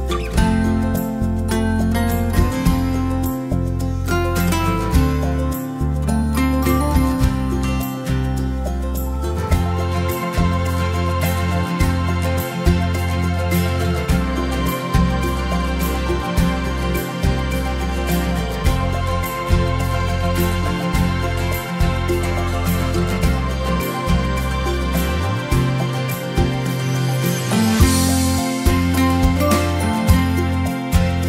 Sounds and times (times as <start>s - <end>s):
Music: 0.0s - 31.2s.